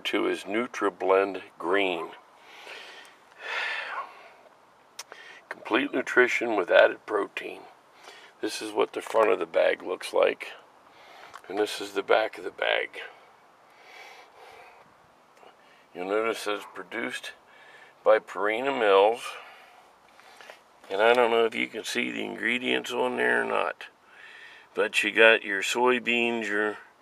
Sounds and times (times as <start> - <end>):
Speech: 0.0 - 2.2, 5.5 - 7.8, 8.4 - 10.6, 11.4 - 13.2, 15.9 - 17.4, 18.0 - 19.4, 20.9 - 23.9, 24.8 - 26.9.